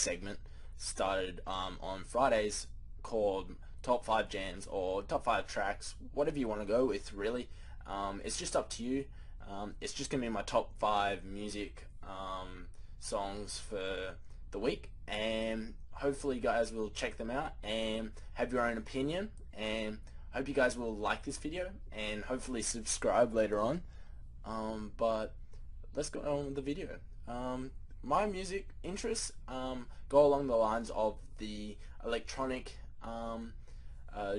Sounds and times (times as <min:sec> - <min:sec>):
Speech: 0:00.0 - 0:34.3.